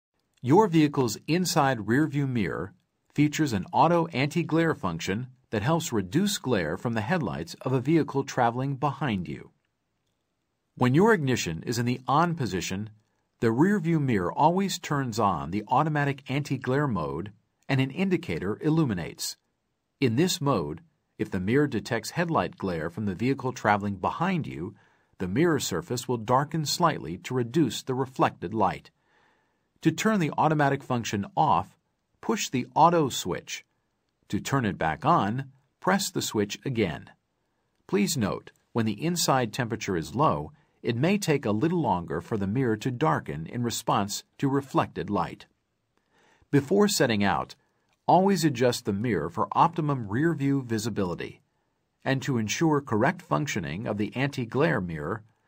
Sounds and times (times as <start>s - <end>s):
Speech: 0.4s - 9.6s, 10.8s - 19.4s, 20.0s - 29.0s, 29.8s - 33.7s, 34.3s - 37.2s, 37.9s - 45.5s, 46.5s - 51.4s, 52.0s - 55.3s.